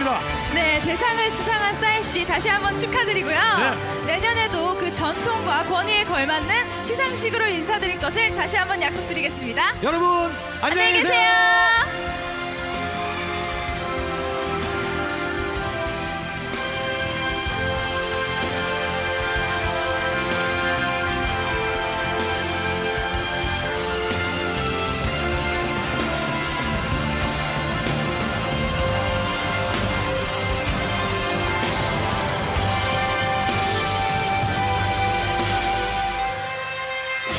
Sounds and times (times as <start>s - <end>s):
Music: 0.0s - 37.3s.